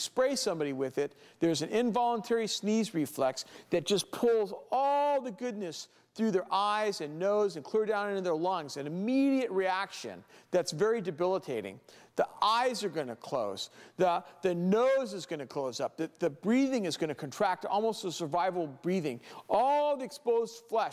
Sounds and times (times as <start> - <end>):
Speech: 0.0 - 20.9.